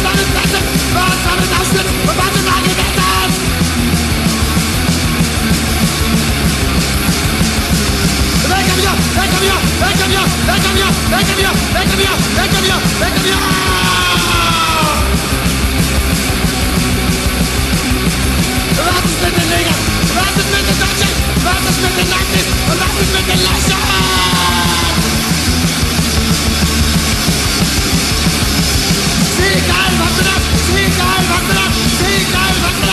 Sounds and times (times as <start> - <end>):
Punk rock: 0.0 - 32.9.